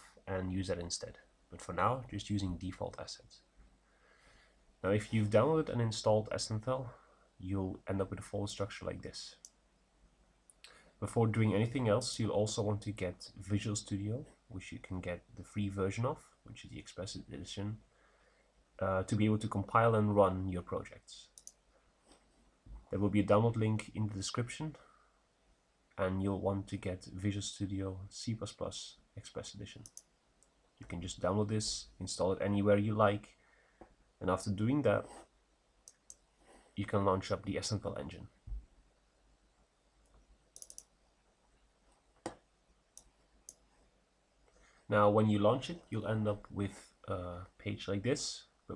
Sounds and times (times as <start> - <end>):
Speech: 0.0 - 3.4, 4.8 - 9.5, 11.0 - 17.8, 18.8 - 21.4, 22.9 - 24.9, 26.0 - 29.9, 30.8 - 33.4, 34.2 - 35.2, 36.8 - 38.4, 44.9 - 48.7.